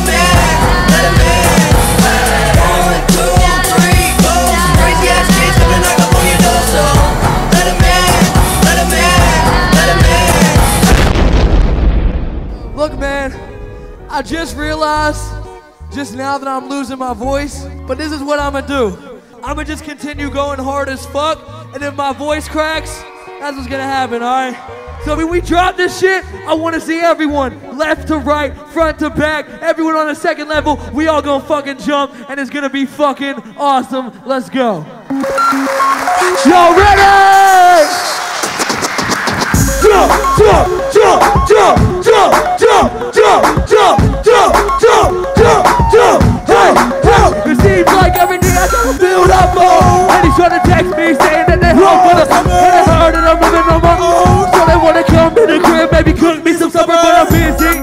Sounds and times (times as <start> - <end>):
Singing: 0.0 - 10.9, 39.6 - 57.8
Hip hop music: 0.0 - 11.3, 12.6 - 30.8, 31.4 - 57.8
Speech: 14.1 - 35.0, 36.3 - 38.0.